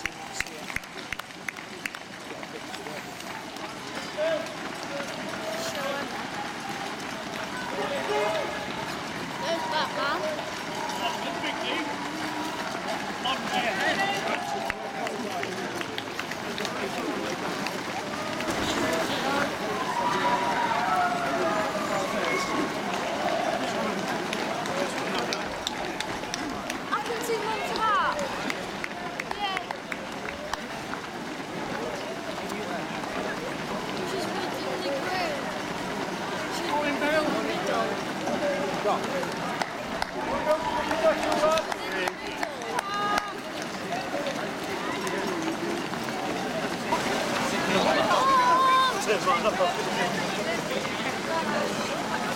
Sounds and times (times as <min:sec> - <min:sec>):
Outside, urban or manmade: 0:00.0 - 0:52.3
Run: 0:00.0 - 0:52.3.